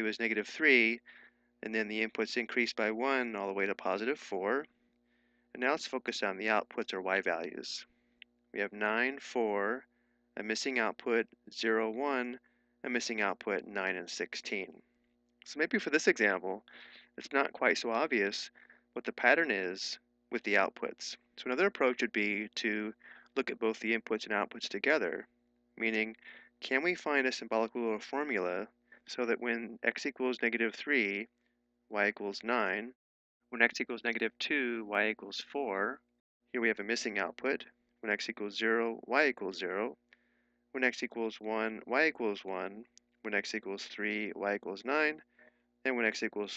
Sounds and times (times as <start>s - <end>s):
Speech: 0.0s - 4.7s, 5.6s - 7.9s, 8.6s - 9.8s, 10.4s - 14.8s, 15.5s - 25.2s, 25.8s - 31.3s, 31.9s - 33.0s, 33.6s - 36.0s, 36.6s - 40.0s, 40.8s - 45.2s, 45.9s - 46.5s.